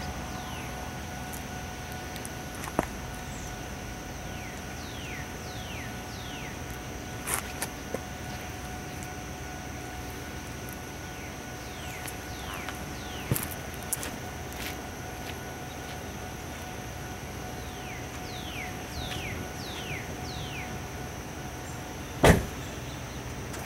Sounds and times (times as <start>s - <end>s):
Car: 0.0s - 23.6s.